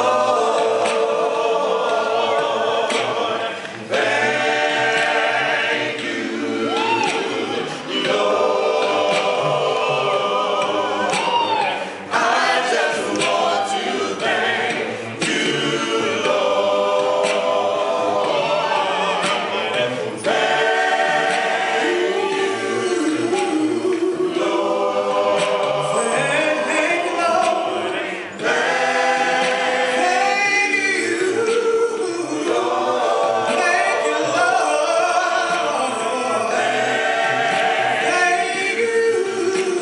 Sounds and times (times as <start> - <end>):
Choir: 0.0 - 39.8.